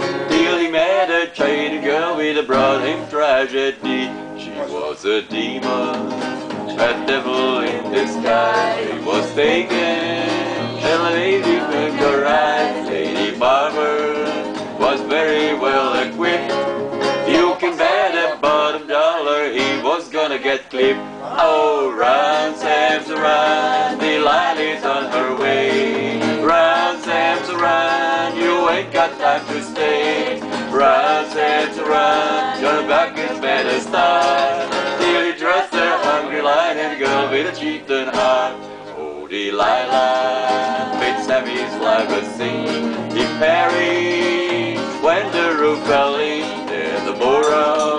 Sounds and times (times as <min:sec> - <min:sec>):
Music: 0:00.0 - 0:47.9.